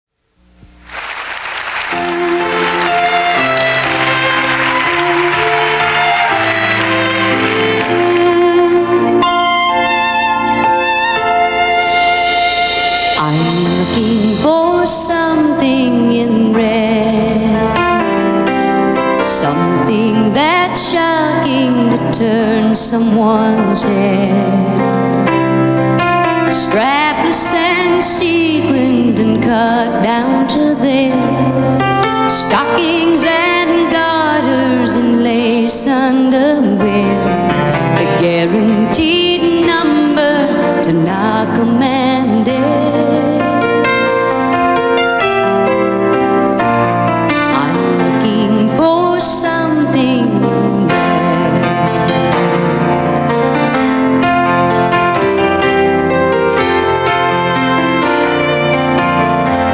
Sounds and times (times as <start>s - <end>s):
Violin, fiddle: 2.1s - 13.8s.